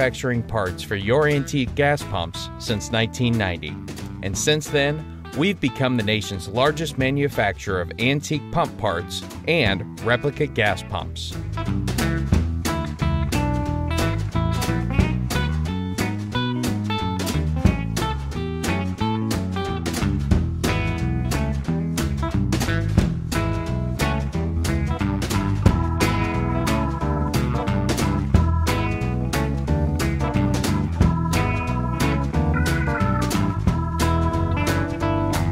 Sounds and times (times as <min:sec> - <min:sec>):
Music: 0:00.0 - 0:35.5.